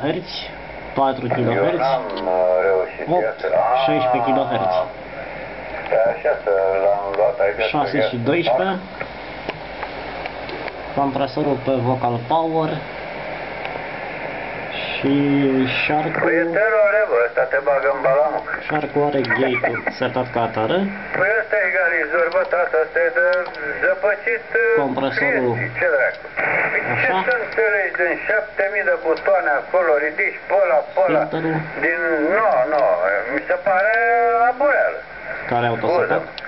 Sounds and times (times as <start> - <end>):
Speech: 0.0 - 5.0, 5.9 - 8.9, 11.0 - 12.9, 14.7 - 26.2, 26.8 - 36.4
Radio: 0.0 - 36.4.